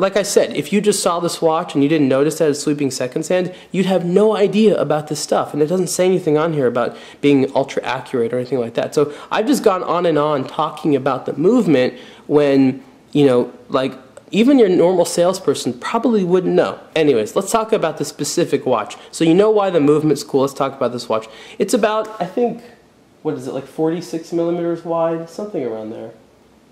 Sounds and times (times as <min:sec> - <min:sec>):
Speech: 0:00.0 - 0:26.2.